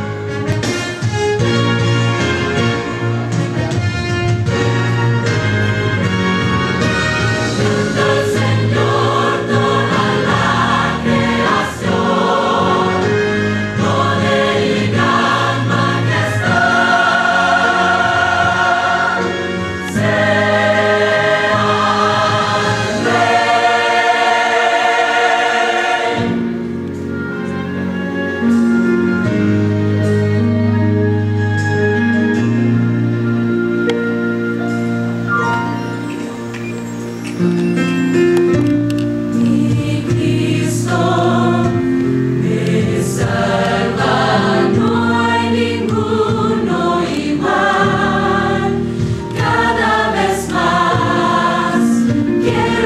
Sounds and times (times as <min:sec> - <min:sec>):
Music: 0:00.0 - 0:52.8.